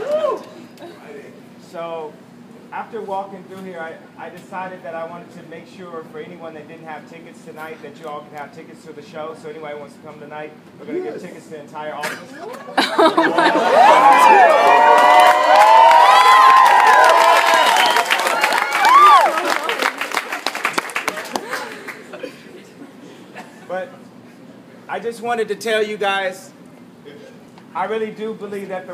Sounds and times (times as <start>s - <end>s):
Cheering: 0.0s - 0.6s, 13.2s - 21.6s
Crowd: 0.0s - 1.4s, 12.1s - 23.6s.